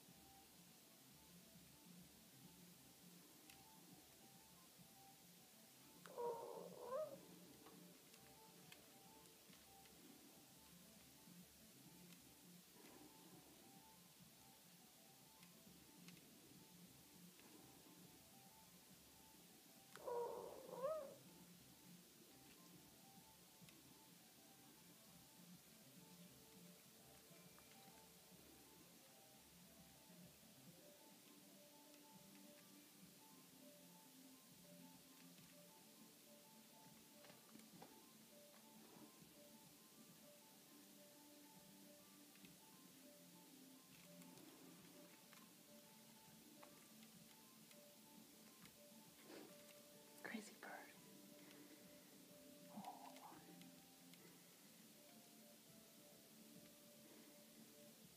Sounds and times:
Domestic animals, pets: 0:06.0 - 0:07.4, 0:19.9 - 0:21.3, 0:52.7 - 0:54.3
Coo: 0:06.1 - 0:07.2, 0:20.0 - 0:21.2.

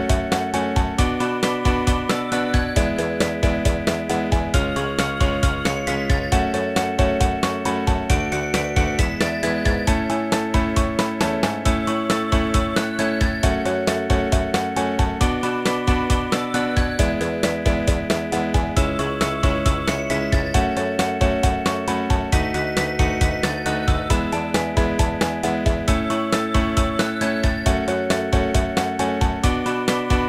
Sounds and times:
Rhythm and blues: 0:00.0 - 0:30.2.

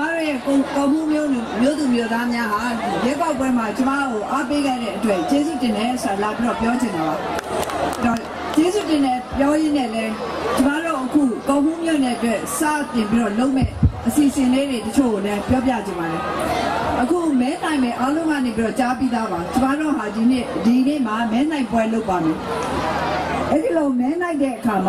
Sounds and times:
Female speech, woman speaking: 0:00.0 - 0:07.2, 0:08.0 - 0:16.2, 0:17.0 - 0:22.4, 0:23.5 - 0:24.8.

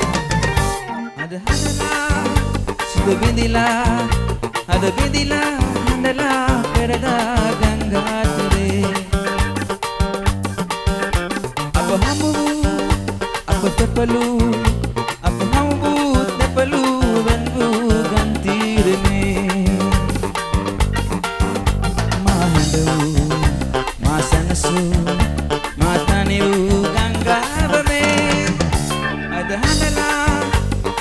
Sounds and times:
Music: 0:00.0 - 0:31.0.

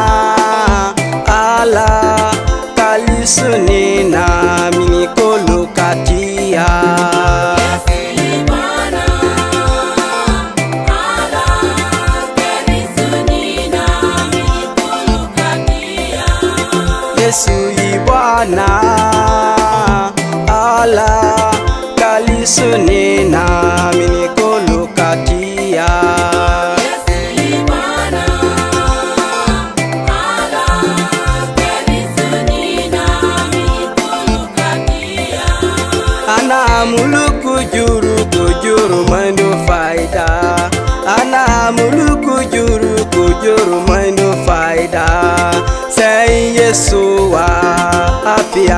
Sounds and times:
Gospel music: 0:00.0 - 0:48.7.

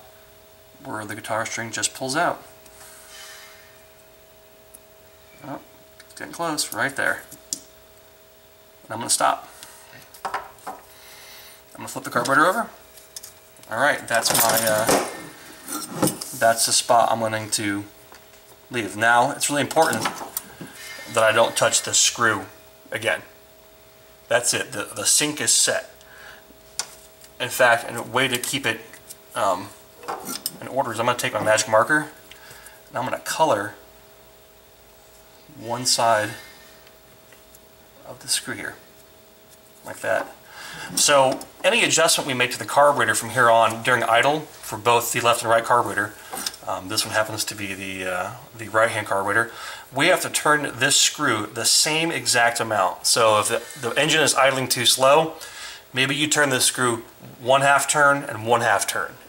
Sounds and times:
Speech: 0:00.8 - 0:02.5, 0:05.4 - 0:07.3, 0:08.9 - 0:09.5, 0:11.8 - 0:12.8, 0:13.7 - 0:15.1, 0:16.4 - 0:17.9, 0:18.7 - 0:20.2, 0:21.1 - 0:23.4, 0:24.3 - 0:26.0, 0:27.4 - 0:29.8, 0:30.6 - 0:32.2, 0:32.9 - 0:33.8, 0:35.5 - 0:36.4, 0:38.0 - 0:38.8, 0:39.8 - 0:40.4, 0:41.0 - 0:55.4, 0:56.0 - 0:59.2.

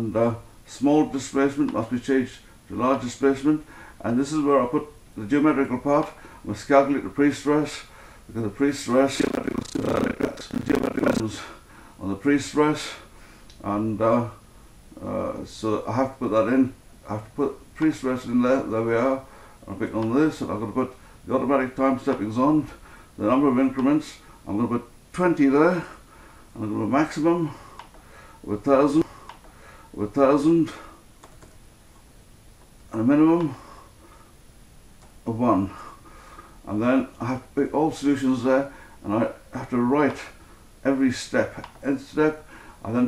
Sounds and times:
Speech: 0:00.0 - 0:14.4, 0:15.0 - 0:26.0, 0:26.6 - 0:27.6, 0:28.5 - 0:29.1, 0:30.0 - 0:30.9, 0:32.9 - 0:33.6, 0:35.3 - 0:35.8, 0:36.7 - 0:43.0
Computer keyboard: 0:31.2 - 0:31.6.

